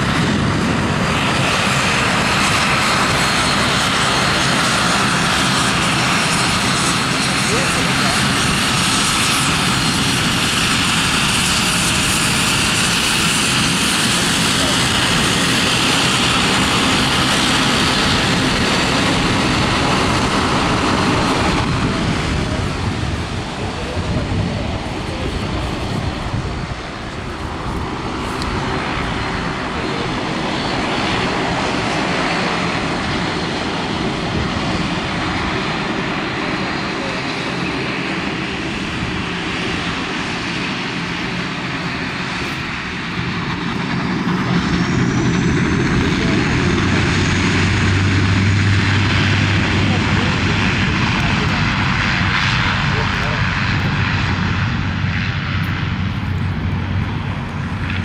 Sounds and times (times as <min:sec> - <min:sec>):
Aircraft engine: 0:00.0 - 0:58.0
Speech: 0:07.3 - 0:08.8, 0:14.2 - 0:16.1, 0:21.1 - 0:26.7, 0:29.6 - 0:30.5, 0:36.2 - 0:38.1, 0:46.0 - 0:46.9, 0:49.6 - 0:53.6.